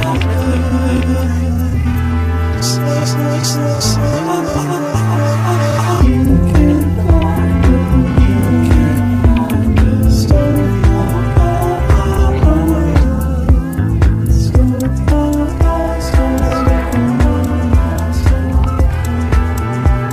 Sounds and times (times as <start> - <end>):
Blues: 0.0 - 20.1.